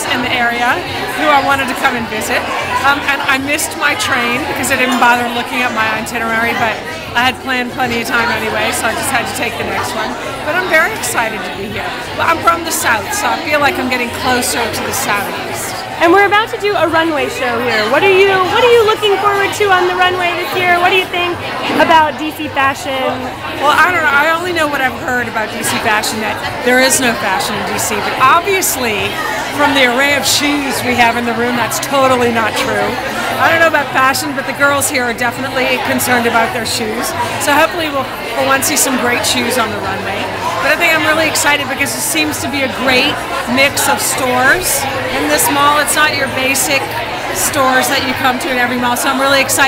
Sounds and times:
Speech: 0.0 - 49.6.

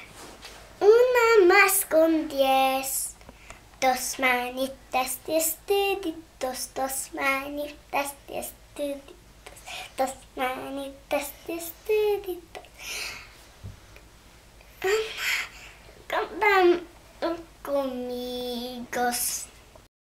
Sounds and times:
Speech: 0.8 - 3.2, 16.1 - 19.5
Child singing: 10.0 - 12.7, 16.1 - 19.6.

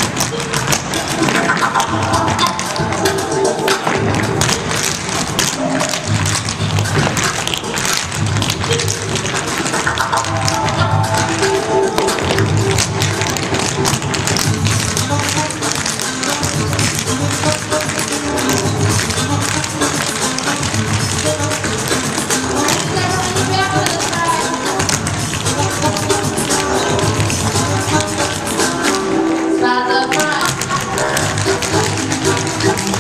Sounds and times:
Music: 0.0 - 33.0.

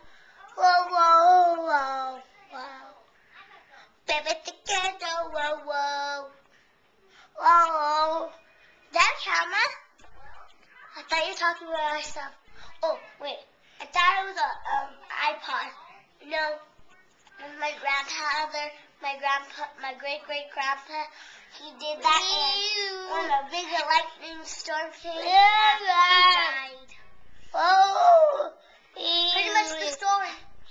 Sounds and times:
Speech: 9.0 - 27.0, 29.0 - 30.5
Child singing: 29.0 - 30.5.

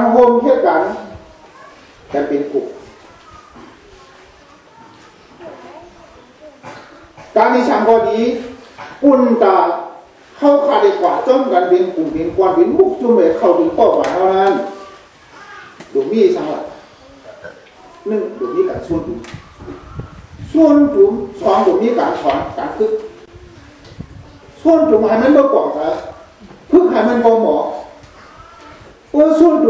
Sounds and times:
Male speech, man speaking: 0.0 - 1.2, 2.1 - 2.8, 7.3 - 14.9, 15.9 - 16.8, 18.0 - 19.3, 20.5 - 23.1, 24.6 - 28.0, 29.1 - 29.6
Narration, monologue: 0.0 - 1.3, 2.0 - 3.8, 6.6 - 23.3, 24.1 - 29.6.

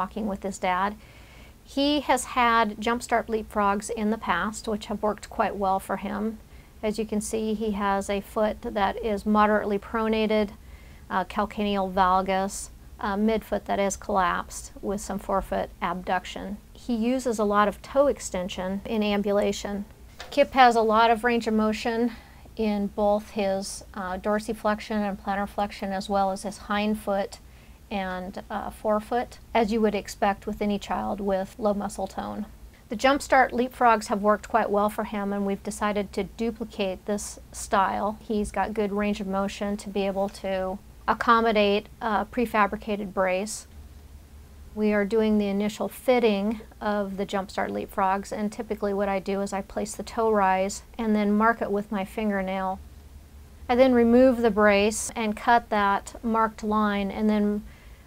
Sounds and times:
Speech: 0.0 - 1.0, 1.7 - 43.7, 44.8 - 52.8, 53.7 - 57.7.

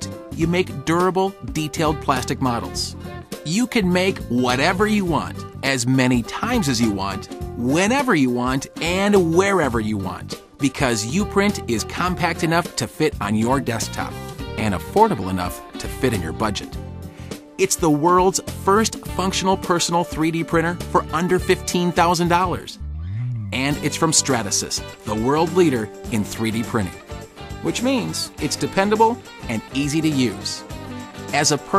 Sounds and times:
Speech: 0.0 - 16.8, 17.6 - 22.8, 23.5 - 27.0, 27.6 - 30.6, 31.3 - 31.7
Music: 0.0 - 31.7.

